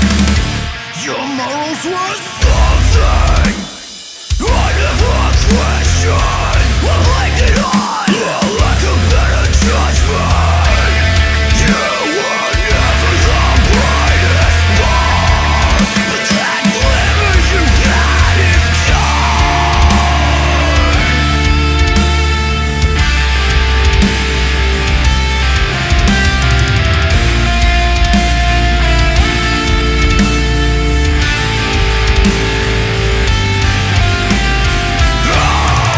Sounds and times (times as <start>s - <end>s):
Soundtrack music: 0.0s - 35.9s.